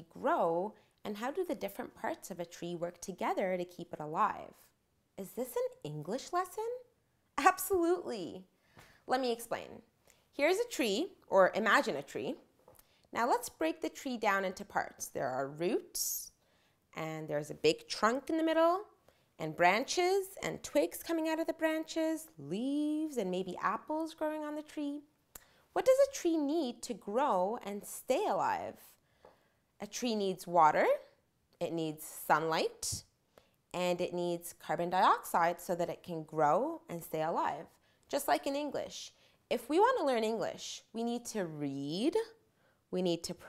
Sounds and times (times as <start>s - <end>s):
Female speech, woman speaking: 0.0s - 8.5s, 9.1s - 9.8s, 10.4s - 12.4s, 13.2s - 16.3s, 17.0s - 25.1s, 25.8s - 28.8s, 29.8s - 33.0s, 33.8s - 42.4s, 43.0s - 43.4s
Narration, monologue: 0.0s - 43.4s.